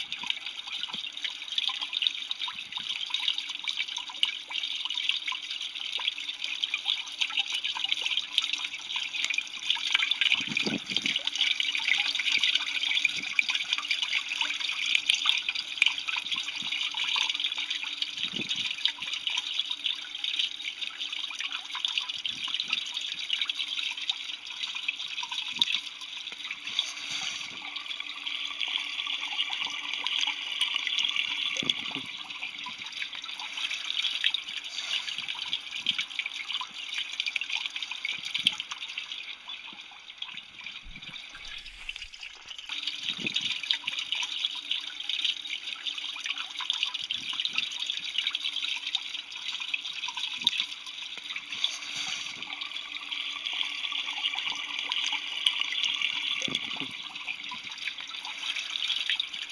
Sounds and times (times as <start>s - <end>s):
Water: 0.0s - 59.5s.